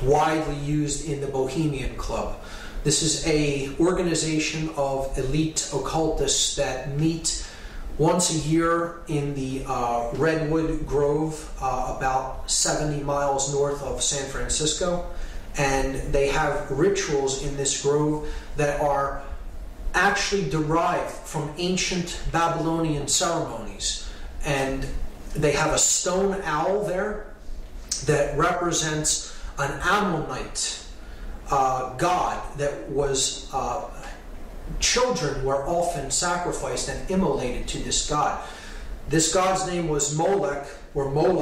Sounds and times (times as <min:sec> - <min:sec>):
Speech: 0:00.0 - 0:19.3, 0:19.9 - 0:38.5, 0:39.1 - 0:41.4.